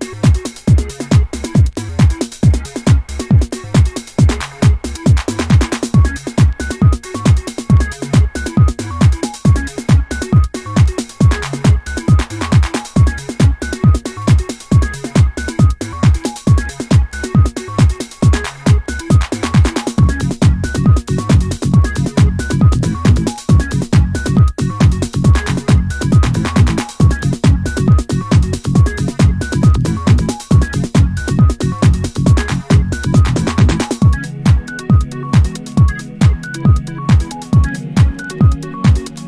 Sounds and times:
Trance music: 0:00.0 - 0:39.2.

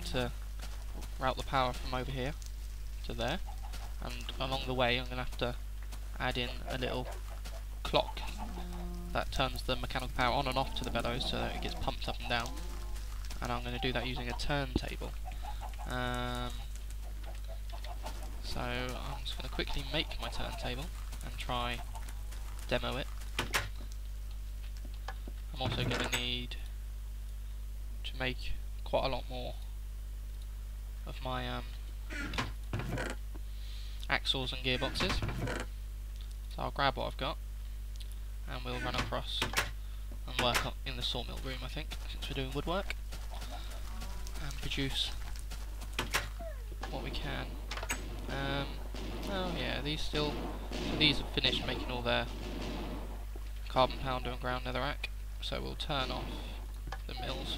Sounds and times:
Speech: 0:00.0 - 0:00.4, 0:01.2 - 0:02.4, 0:03.0 - 0:03.4, 0:04.0 - 0:05.6, 0:06.2 - 0:07.1, 0:07.8 - 0:08.3, 0:09.2 - 0:12.6, 0:13.4 - 0:15.2, 0:15.9 - 0:16.6, 0:18.4 - 0:21.8, 0:22.7 - 0:23.1, 0:25.6 - 0:26.6, 0:28.0 - 0:29.6, 0:31.1 - 0:31.7, 0:34.1 - 0:35.3, 0:36.5 - 0:37.4, 0:38.5 - 0:39.5, 0:40.3 - 0:42.9, 0:44.4 - 0:45.2, 0:46.9 - 0:47.6, 0:48.3 - 0:50.4, 0:51.0 - 0:52.3, 0:53.7 - 0:57.5.

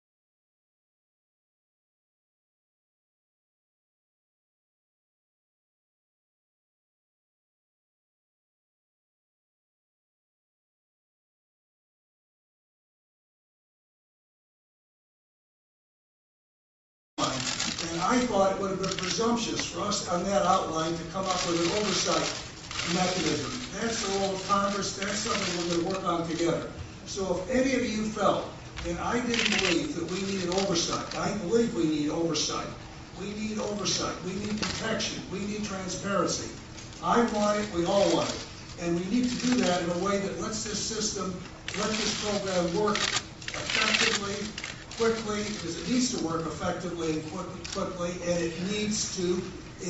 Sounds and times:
Speech: 0:17.2 - 0:49.9.

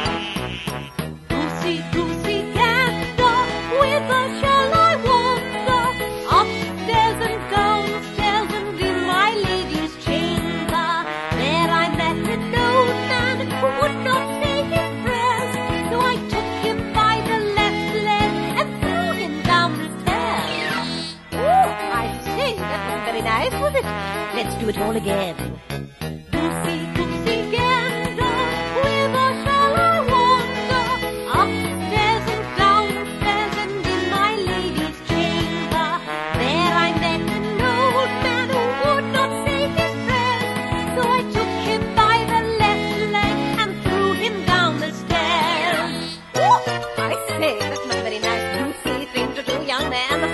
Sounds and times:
Music for children: 0:00.0 - 0:50.3.

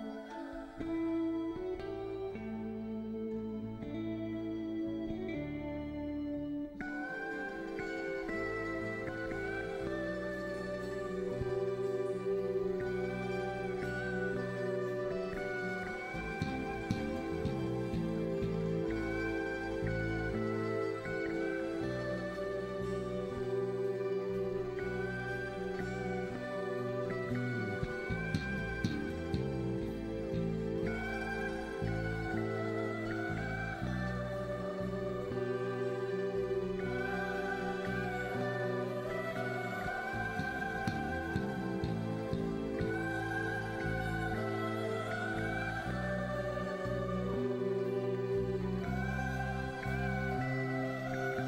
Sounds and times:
Music: 0:00.0 - 0:51.4.

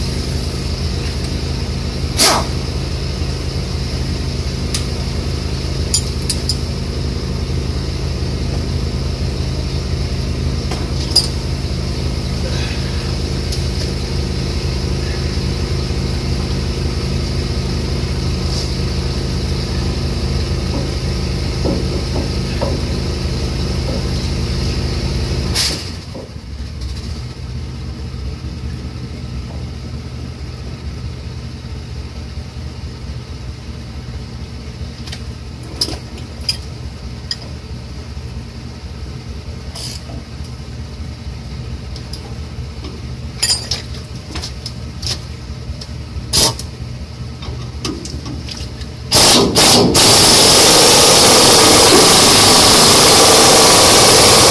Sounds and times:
Air brake: 0:02.2 - 0:02.6, 0:18.5 - 0:18.8, 0:25.5 - 0:26.1.

